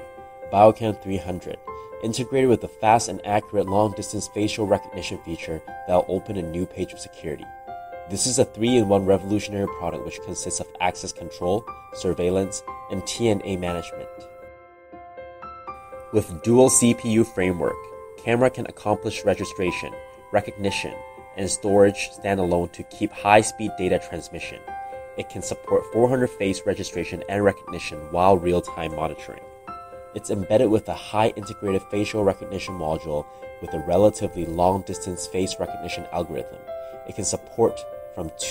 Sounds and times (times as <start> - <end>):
Music: 0.0 - 38.5
Speech: 0.5 - 7.5, 8.1 - 14.3, 16.2 - 24.6, 25.2 - 29.4, 30.2 - 38.5.